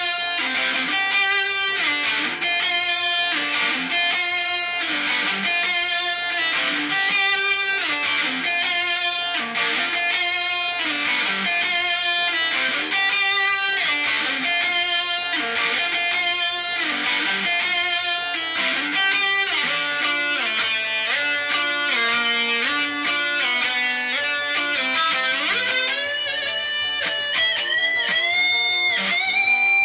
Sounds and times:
Guitar: 0.0s - 29.8s.

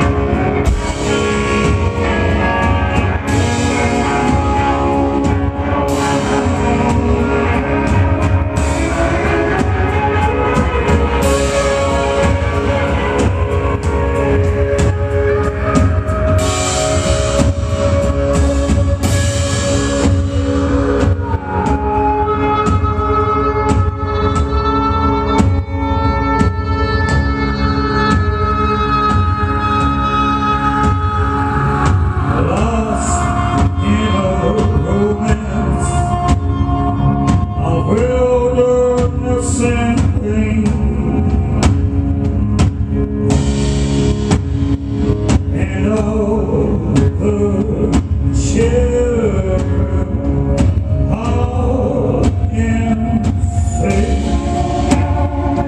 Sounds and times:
Music: 0.0s - 55.6s.

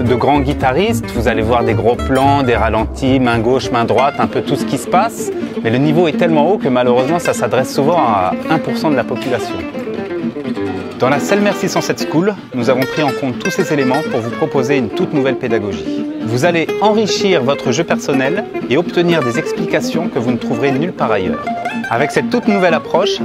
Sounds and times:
Musical instrument: 0.0s - 5.4s
Speech: 0.0s - 9.7s, 10.6s - 23.2s.

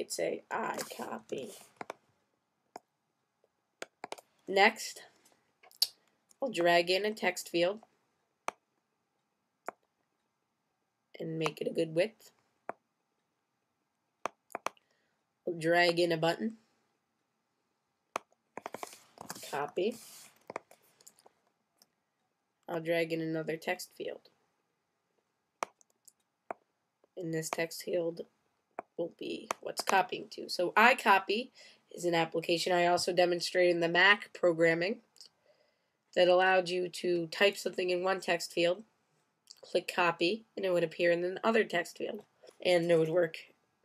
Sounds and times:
Speech: 0.0s - 1.6s, 4.5s - 5.1s, 6.4s - 7.8s, 11.2s - 12.3s, 15.5s - 16.6s, 19.4s - 20.0s, 22.7s - 24.3s, 27.2s - 28.2s, 29.0s - 35.2s, 36.2s - 38.8s, 39.5s - 43.5s.

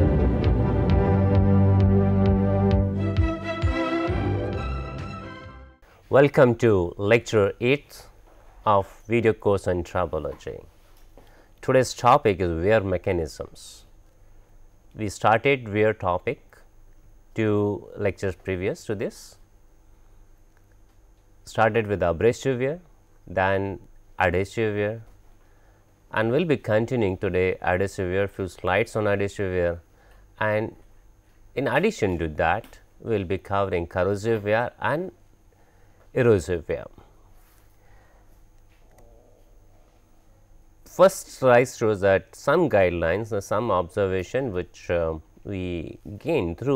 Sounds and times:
Speech: 6.1s - 10.7s, 11.6s - 13.9s, 14.9s - 16.7s, 17.4s - 19.4s, 21.4s - 25.1s, 26.1s - 29.8s, 30.4s - 30.8s, 31.5s - 35.2s, 36.1s - 37.1s, 40.9s - 46.7s.

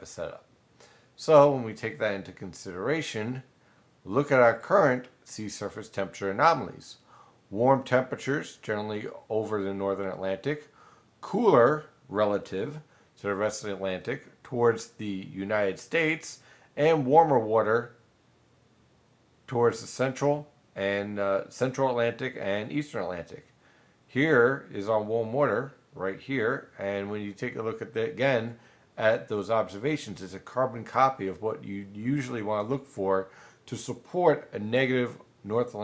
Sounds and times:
Speech: 0.0s - 0.5s, 1.2s - 3.5s, 4.1s - 18.0s, 19.5s - 23.5s, 24.1s - 35.8s
Inside, small room: 0.0s - 35.8s.

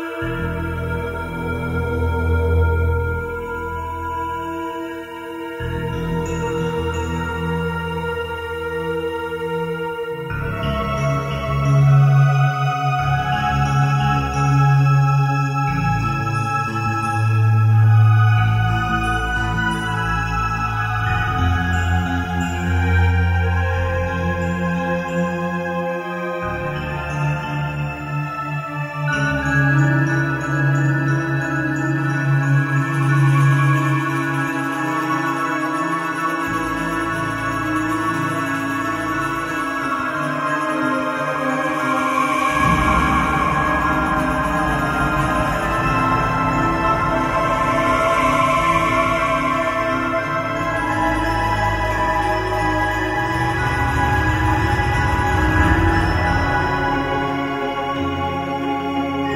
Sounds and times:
Music: 0.0s - 59.3s.

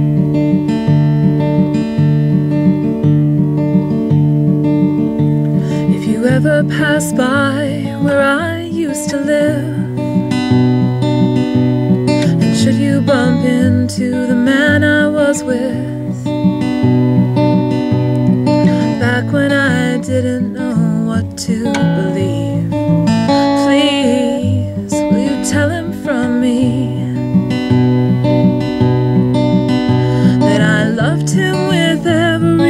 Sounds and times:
Music: 0.0s - 32.6s
Female singing: 5.8s - 9.9s, 12.2s - 16.2s, 18.8s - 22.7s, 23.4s - 27.2s, 30.3s - 32.6s.

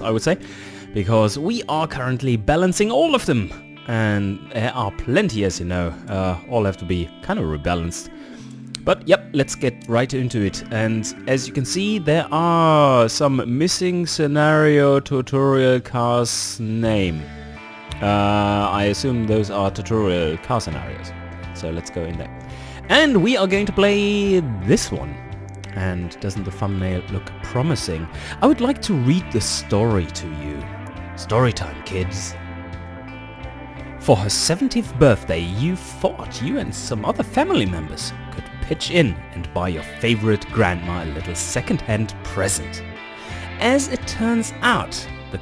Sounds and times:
Speech: 0.0s - 8.1s, 8.8s - 17.2s, 18.0s - 32.4s, 34.0s - 42.8s, 43.6s - 45.4s
Music: 0.0s - 45.4s.

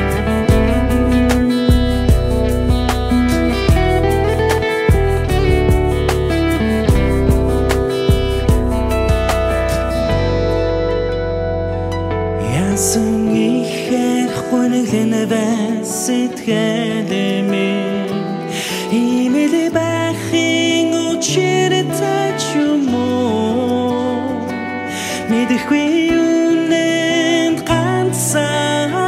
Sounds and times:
Music: 0.0s - 29.0s.

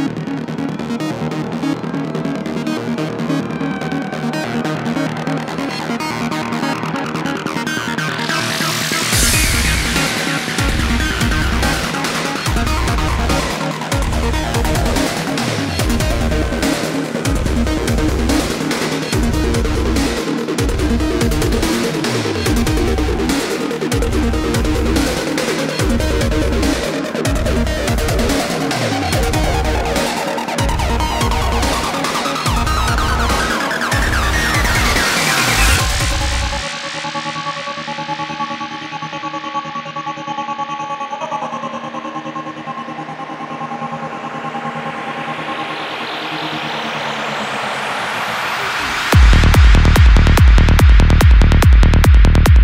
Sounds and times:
Music: 0.0s - 52.6s.

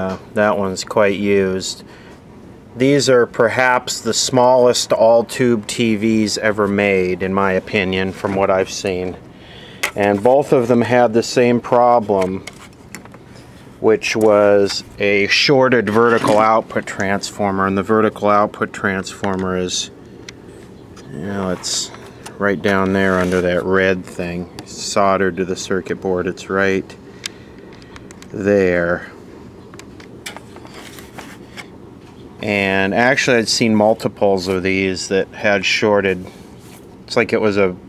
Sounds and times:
Speech: 0.0s - 1.9s, 2.8s - 9.2s, 10.0s - 12.5s, 13.8s - 19.9s, 21.1s - 27.0s, 28.3s - 29.2s, 32.4s - 36.4s, 37.1s - 37.8s.

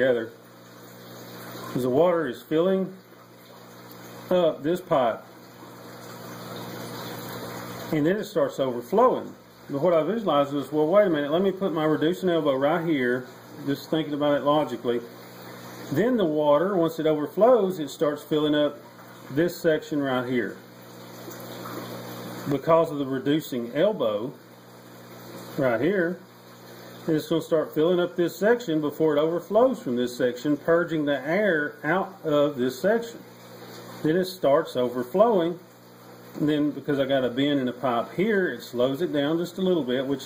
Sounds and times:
Speech: 0.0s - 0.4s, 1.8s - 3.0s, 4.3s - 5.3s, 7.9s - 15.1s, 15.9s - 20.6s, 22.5s - 24.4s, 25.6s - 26.2s, 27.1s - 33.3s, 34.0s - 35.6s, 36.4s - 40.2s.

